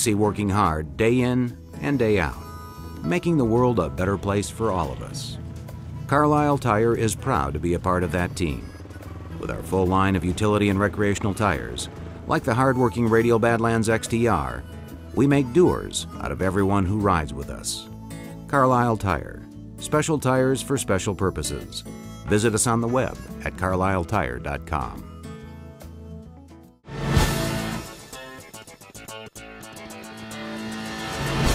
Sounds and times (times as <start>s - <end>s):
Speech: 0.0s - 2.4s, 3.0s - 5.4s, 6.1s - 8.8s, 9.4s - 14.6s, 15.2s - 17.9s, 18.5s - 25.0s
Music: 0.0s - 31.5s.